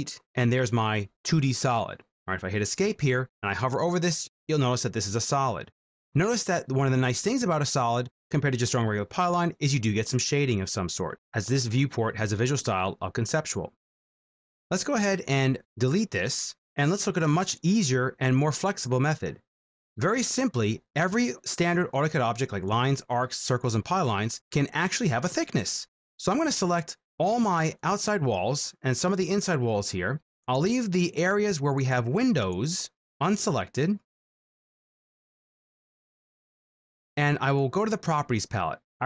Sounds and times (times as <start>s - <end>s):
Speech: 0.0s - 13.8s, 14.7s - 19.4s, 20.0s - 34.1s, 37.2s - 39.0s.